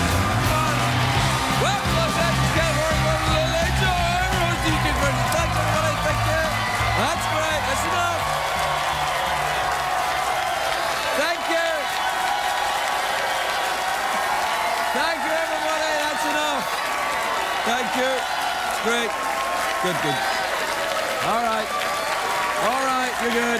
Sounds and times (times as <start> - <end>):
Music: 0.0 - 10.2.